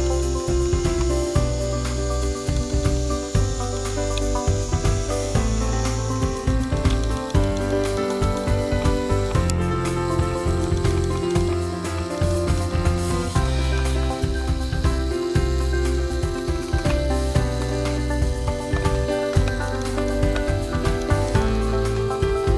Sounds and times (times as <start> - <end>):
Music: 0.0 - 22.5.